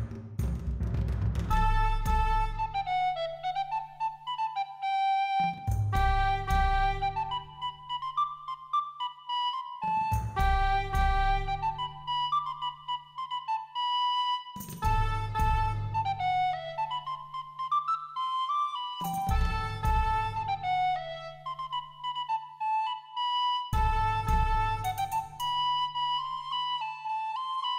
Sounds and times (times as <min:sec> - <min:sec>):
Music: 0:00.0 - 0:27.7.